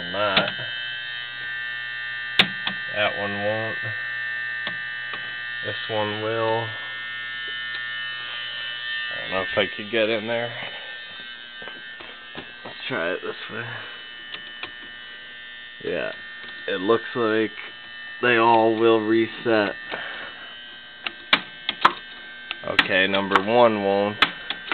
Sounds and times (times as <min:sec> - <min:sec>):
Speech: 0:00.0 - 0:00.7, 0:02.9 - 0:04.0, 0:05.6 - 0:06.8, 0:09.1 - 0:10.7, 0:12.7 - 0:13.9, 0:15.8 - 0:19.8, 0:22.6 - 0:24.2.